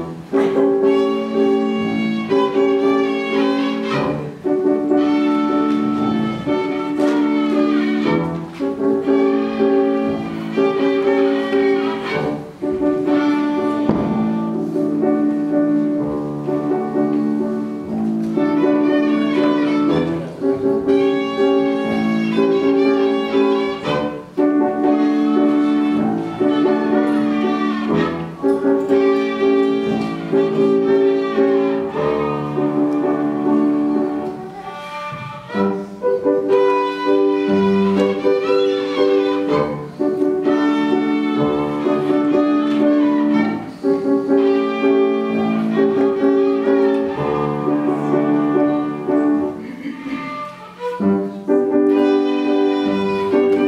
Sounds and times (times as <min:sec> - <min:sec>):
Violin, fiddle: 0:00.0 - 0:53.6.